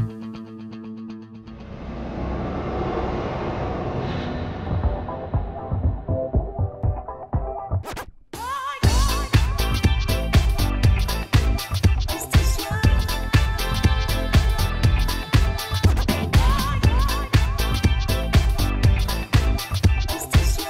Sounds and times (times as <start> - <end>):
Scratching (performance technique): 4.8 - 20.6.